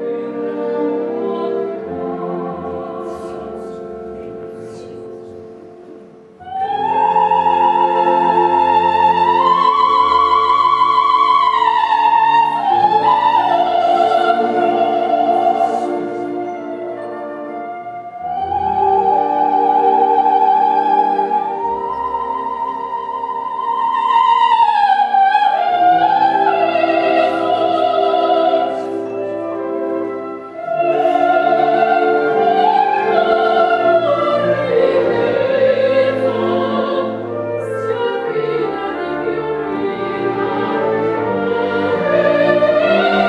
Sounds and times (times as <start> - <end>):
Opera: 0.0 - 43.2.